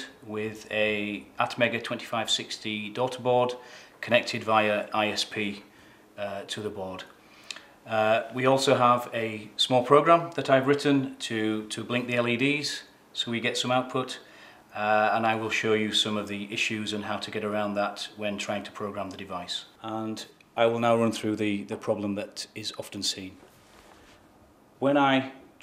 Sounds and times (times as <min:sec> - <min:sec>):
Speech: 0:00.0 - 0:07.2, 0:07.9 - 0:23.5, 0:24.8 - 0:25.6.